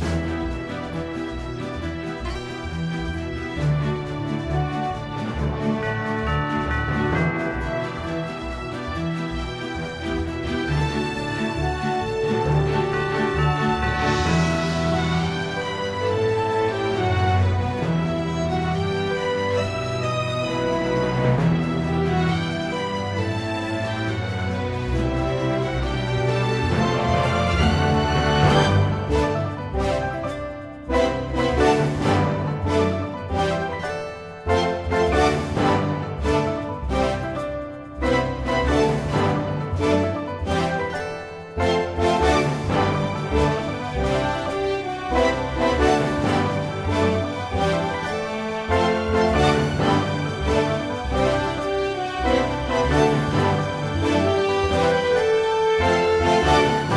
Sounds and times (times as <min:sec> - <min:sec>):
Video game music: 0:00.0 - 0:56.9.